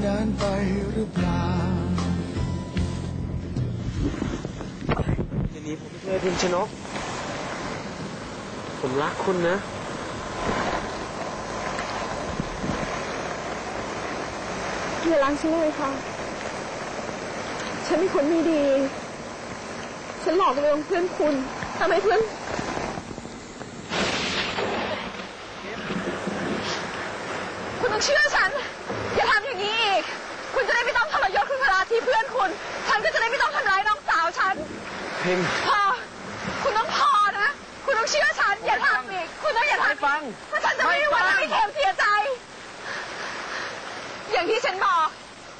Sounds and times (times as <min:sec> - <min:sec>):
Rain: 0:00.0 - 0:45.5.